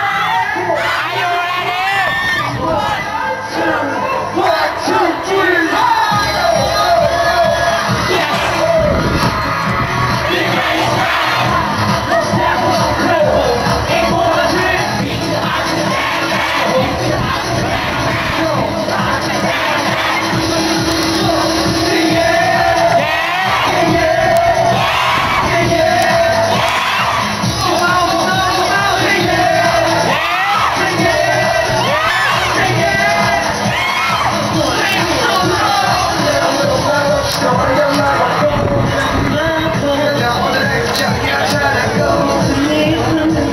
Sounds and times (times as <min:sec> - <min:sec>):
Crowd: 0:00.0 - 0:43.5
Music: 0:00.0 - 0:43.5.